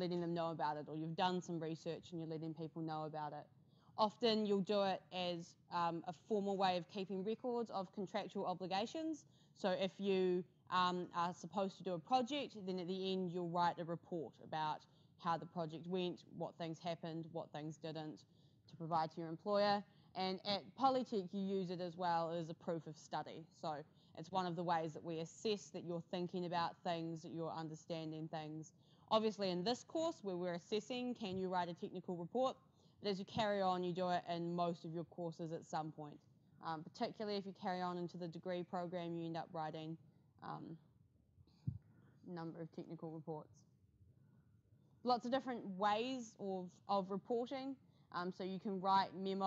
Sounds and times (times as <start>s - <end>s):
Speech: 0.0s - 40.8s, 42.3s - 43.5s, 45.1s - 49.4s.